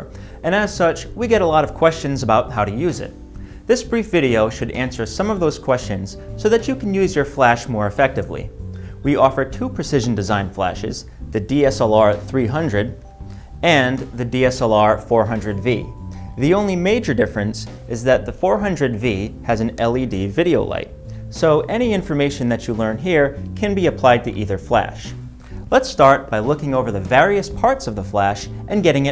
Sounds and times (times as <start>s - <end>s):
Speech: 0.0s - 13.0s, 13.6s - 29.1s
Music: 0.0s - 29.1s.